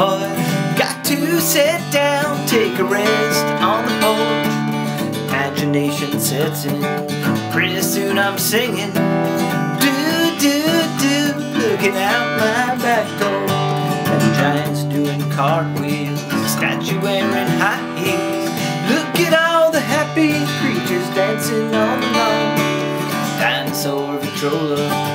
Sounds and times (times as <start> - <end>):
Music: 0.0 - 25.1.